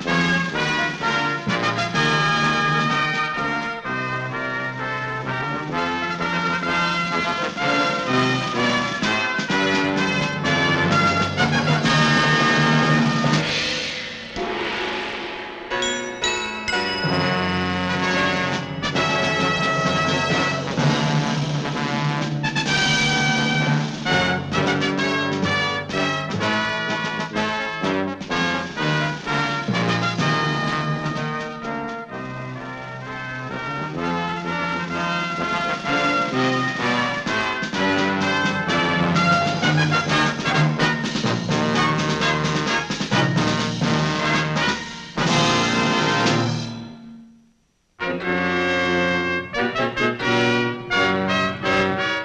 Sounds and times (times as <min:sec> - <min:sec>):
Timpani: 0:00.0 - 0:52.2.